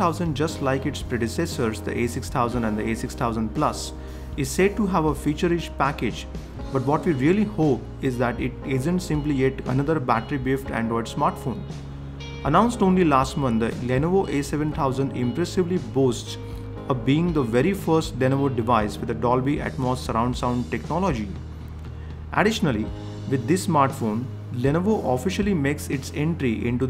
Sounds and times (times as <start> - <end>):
Speech: 0.0 - 11.7, 12.5 - 21.4, 22.4 - 26.9
Music: 0.0 - 26.9.